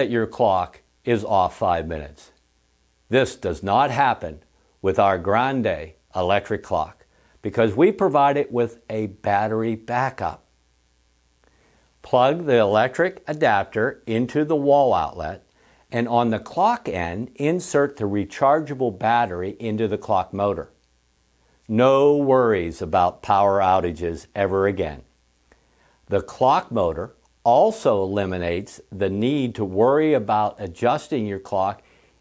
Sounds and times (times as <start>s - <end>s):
Speech: 0.0s - 2.4s, 3.1s - 10.5s, 12.0s - 20.8s, 21.7s - 25.1s, 26.1s - 31.8s.